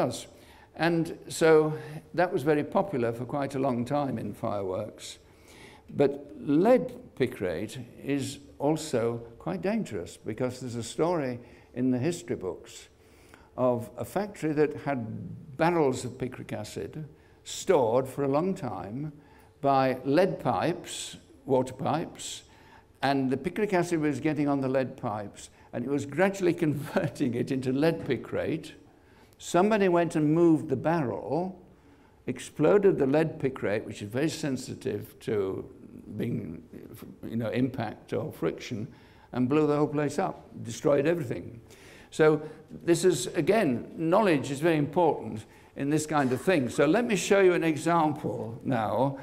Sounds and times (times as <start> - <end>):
Speech: 0.0 - 5.2, 5.9 - 12.9, 13.6 - 28.8, 29.4 - 31.6, 32.3 - 49.2.